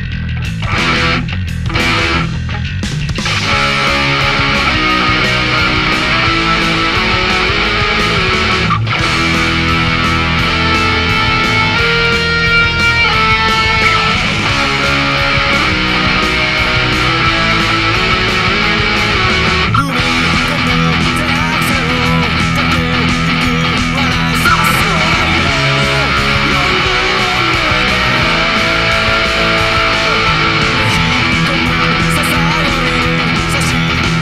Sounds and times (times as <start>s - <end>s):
Electric guitar: 0.0s - 34.2s
Strum: 0.4s - 34.2s.